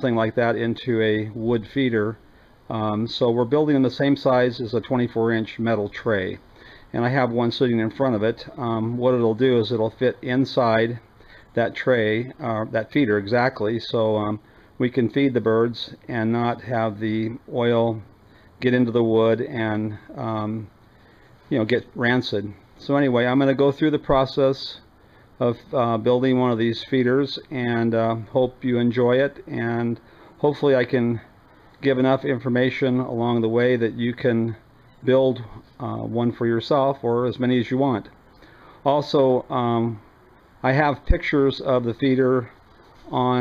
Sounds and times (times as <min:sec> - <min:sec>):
Speech: 0:00.0 - 0:20.7, 0:21.5 - 0:38.2, 0:38.8 - 0:43.4.